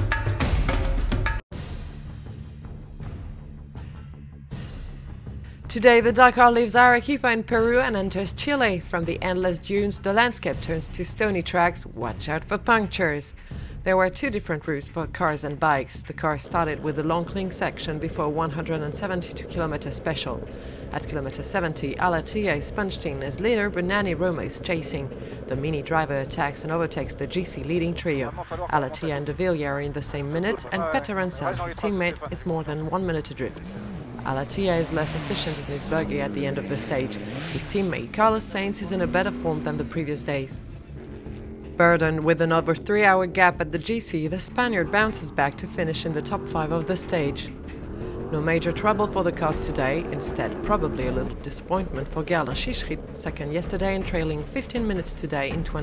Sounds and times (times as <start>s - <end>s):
Car: 4.6s - 55.8s
Speech: 5.7s - 40.6s, 41.8s - 47.5s, 48.3s - 55.8s.